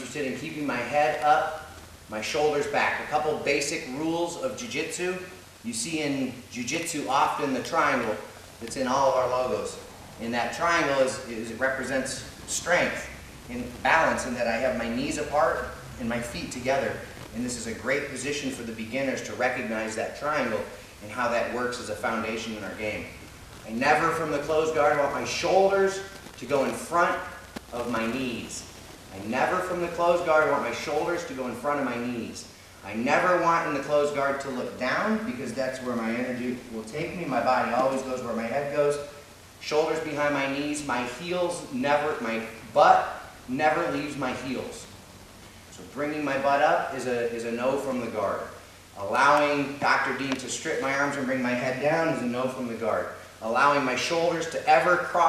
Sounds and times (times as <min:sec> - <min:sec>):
Speech: 0:00.0 - 0:44.9, 0:45.7 - 0:55.2.